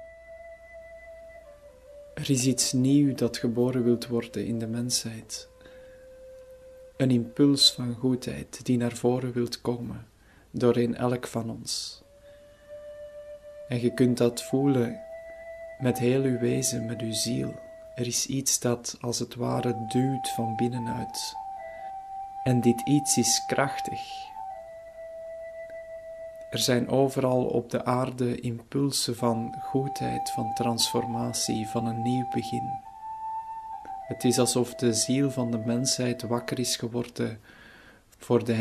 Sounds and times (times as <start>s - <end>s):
Music: 0.0s - 9.4s, 11.1s - 37.3s
Speech: 2.2s - 5.5s, 7.0s - 12.0s, 13.7s - 15.0s, 15.8s - 21.4s, 22.5s - 24.3s, 26.6s - 32.8s, 34.1s - 37.4s, 38.2s - 38.6s.